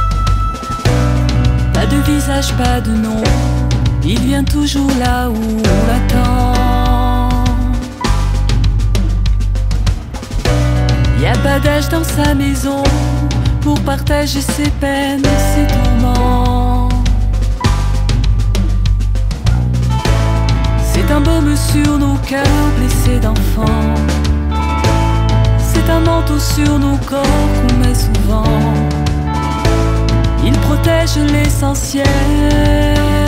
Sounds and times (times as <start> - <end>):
Music: 0.0 - 33.2.